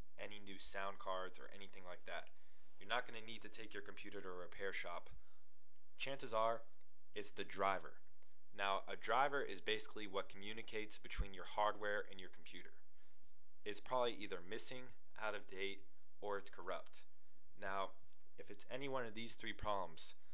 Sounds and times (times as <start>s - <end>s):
Speech: 0.2s - 5.2s, 6.0s - 8.0s, 8.6s - 12.8s, 13.7s - 20.2s.